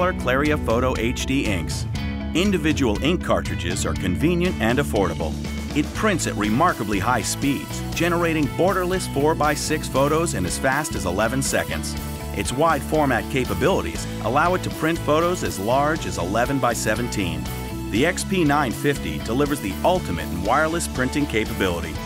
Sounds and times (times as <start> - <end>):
Music: 0.0 - 22.0
Speech: 0.0 - 22.0.